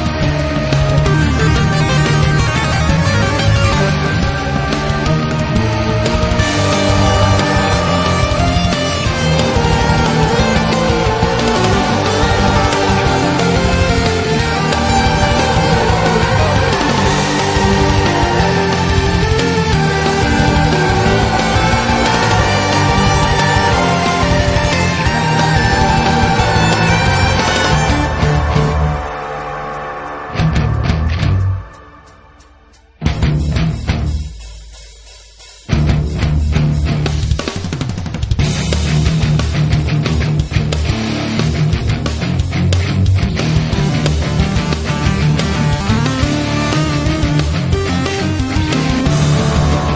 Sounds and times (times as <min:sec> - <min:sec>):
Video game music: 0:00.0 - 0:37.8, 0:38.4 - 0:49.9.